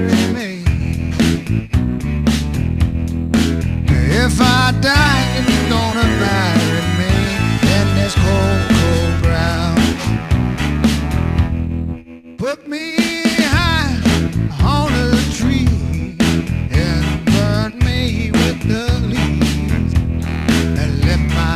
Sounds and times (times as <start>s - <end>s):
Male singing: 0.0s - 0.8s, 3.9s - 10.2s, 12.4s - 21.5s
Blues: 0.0s - 21.5s.